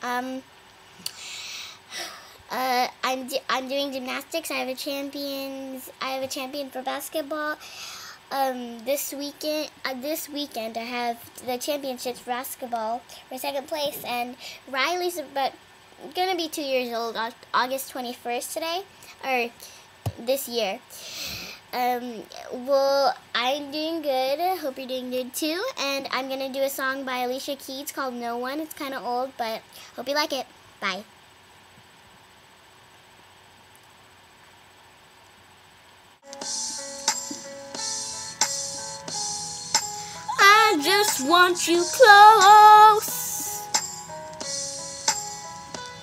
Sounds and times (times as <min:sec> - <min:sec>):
Speech: 0:00.0 - 0:00.5, 0:02.5 - 0:07.6, 0:08.3 - 0:21.0, 0:21.7 - 0:31.1.